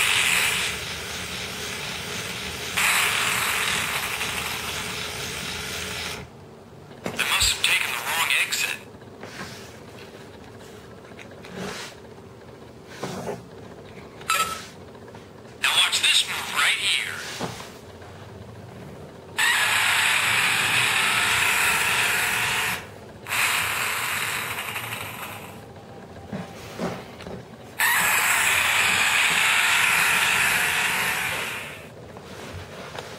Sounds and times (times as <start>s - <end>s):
Speech: 7.1s - 8.9s, 15.6s - 17.4s.